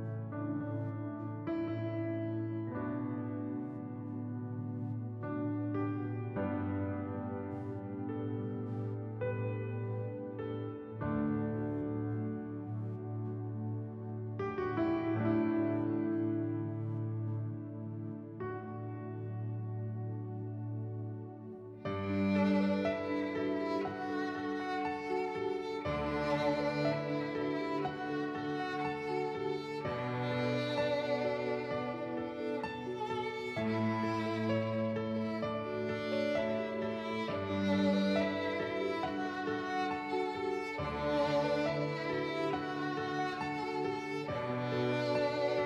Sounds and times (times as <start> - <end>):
Sad music: 0.0 - 45.6
Tender music: 0.0 - 45.6.